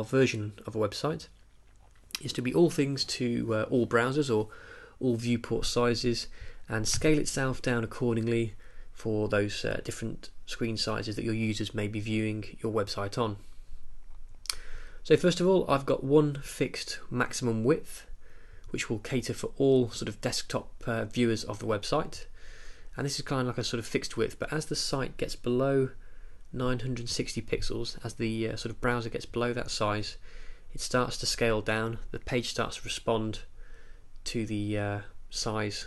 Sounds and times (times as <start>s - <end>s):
Speech: 0.0s - 1.3s, 2.2s - 13.4s, 15.0s - 18.1s, 18.7s - 22.3s, 23.0s - 26.0s, 26.6s - 30.2s, 30.8s - 33.5s, 34.2s - 35.8s.